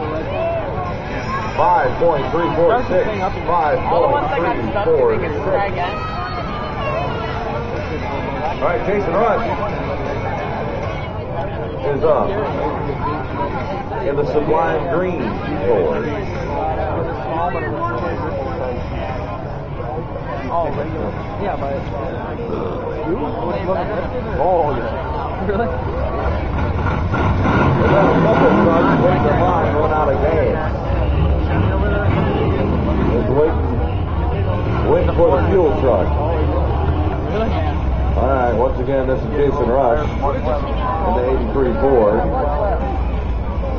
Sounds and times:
Vehicle: 0:00.0 - 0:43.7.

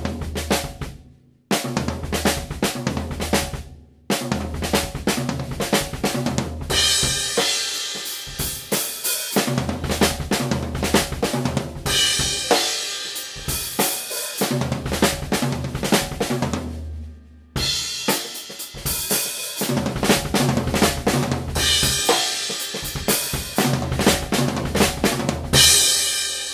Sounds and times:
Music: 0:00.0 - 0:26.5.

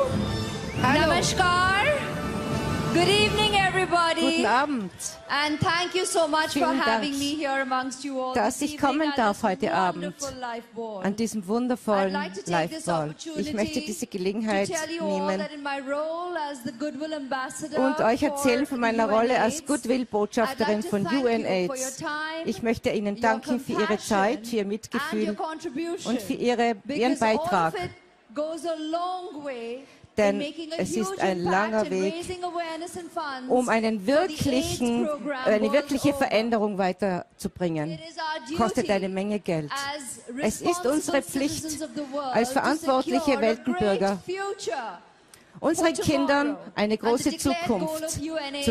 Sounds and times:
Female speech, woman speaking: 0:00.8 - 0:02.0, 0:02.9 - 0:45.0, 0:45.6 - 0:48.7
Narration, monologue: 0:02.9 - 0:48.7.

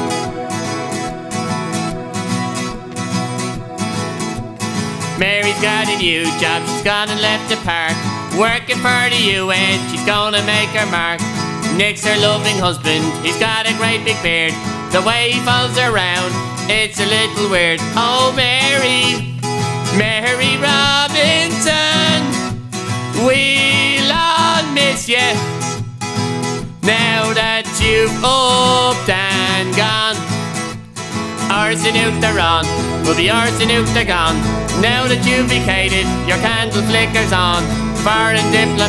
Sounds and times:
Music: 0:00.0 - 0:38.8.

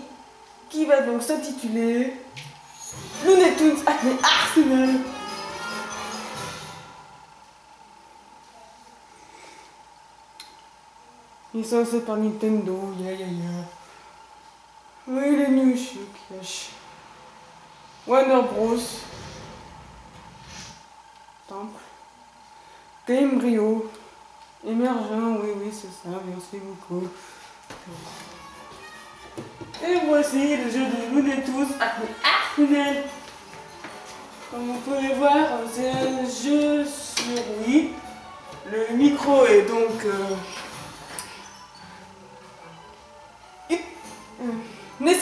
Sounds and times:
Music: 0:02.7 - 0:07.4, 0:27.8 - 0:45.2
Speech: 0:34.5 - 0:38.0.

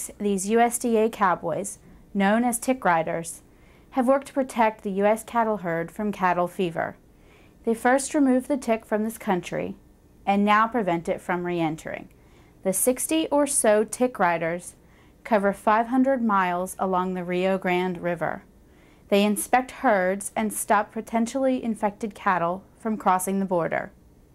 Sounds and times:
Speech: 0:00.0 - 0:03.4, 0:04.0 - 0:07.0, 0:07.6 - 0:18.5, 0:19.1 - 0:24.0.

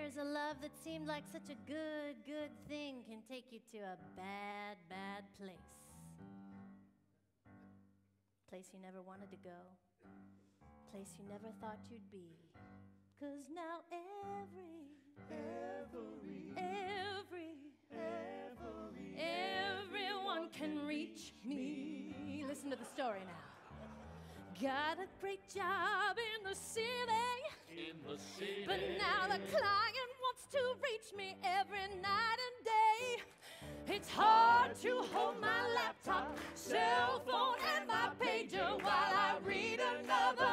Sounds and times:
Music: 0:00.0 - 0:40.5
Speech: 0:08.5 - 0:09.7, 0:11.0 - 0:12.4, 0:22.4 - 0:23.4.

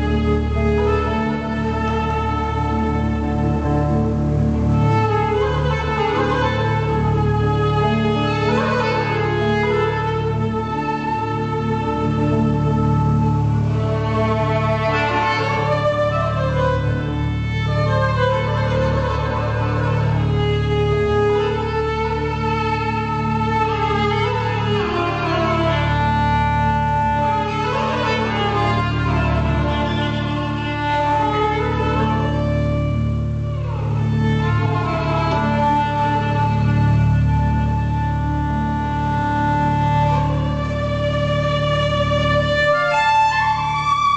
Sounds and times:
Violin, fiddle: 0:00.0 - 0:44.1.

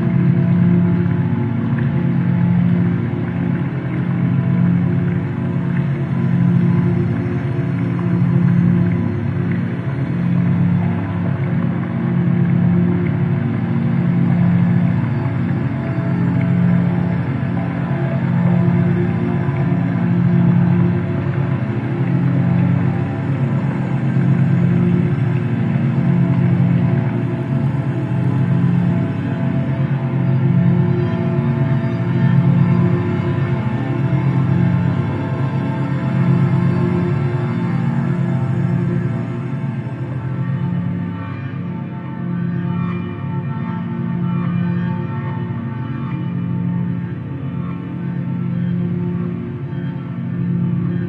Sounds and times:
Ambient music: 0:00.0 - 0:51.0.

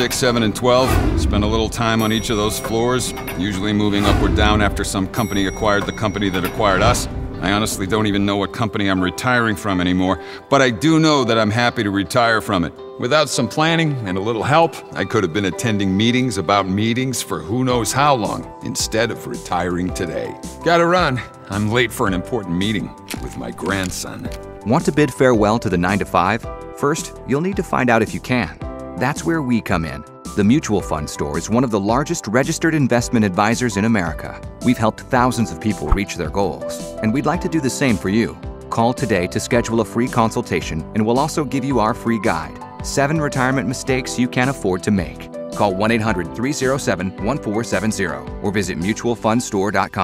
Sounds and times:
Male speech, man speaking: 0:00.0 - 0:50.0
Music: 0:00.0 - 0:50.0
Narration, monologue: 0:00.0 - 0:50.0.

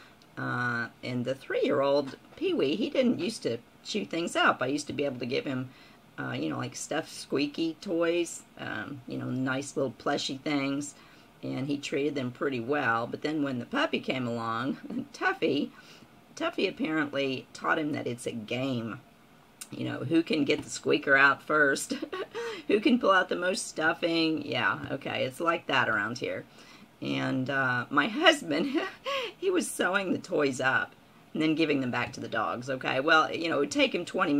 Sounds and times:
Speech: 0:00.4 - 0:15.7, 0:16.4 - 0:19.0, 0:19.6 - 0:26.4, 0:27.0 - 0:34.3.

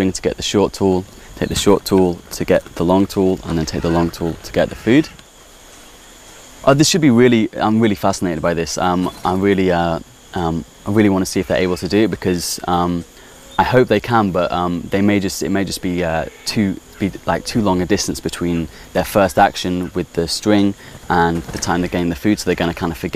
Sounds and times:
Speech: 0:00.0 - 0:05.2, 0:06.6 - 0:23.1.

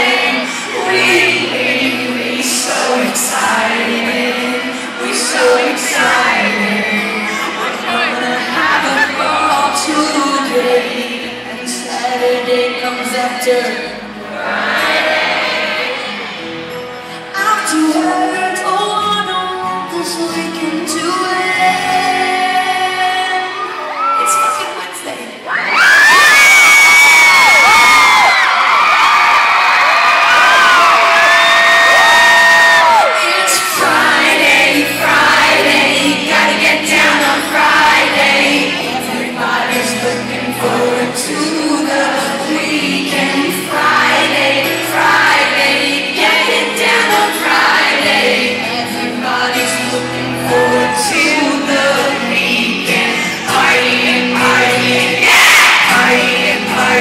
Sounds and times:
Female singing: 0:00.0 - 0:14.0, 0:17.2 - 0:25.4, 0:33.0 - 0:57.0
Music: 0:00.0 - 0:28.8, 0:30.2 - 0:57.0
Speech: 0:24.0 - 0:25.5.

